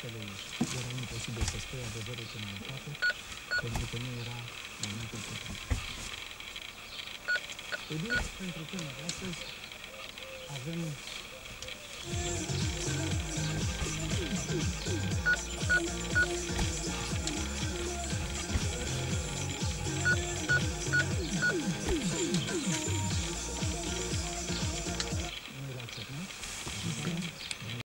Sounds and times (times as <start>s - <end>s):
Music: 12.1s - 25.3s.